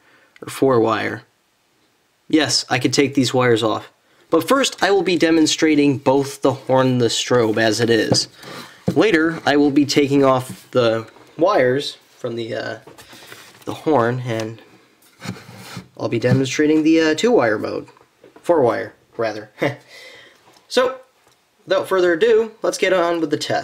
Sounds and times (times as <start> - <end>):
Speech: 0.4 - 1.3, 2.3 - 8.3, 8.9 - 12.9, 13.6 - 14.7, 16.0 - 19.8, 20.7 - 23.6.